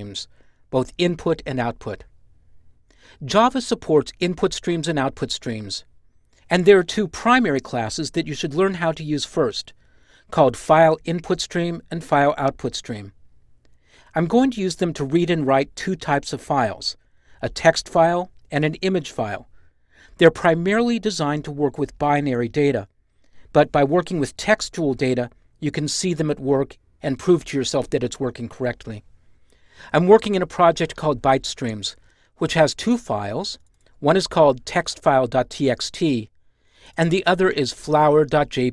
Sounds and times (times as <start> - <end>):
Speech: 0.0 - 2.1, 3.2 - 5.9, 6.5 - 13.2, 14.1 - 19.5, 20.2 - 22.9, 23.5 - 29.0, 29.9 - 36.3, 36.9 - 38.7.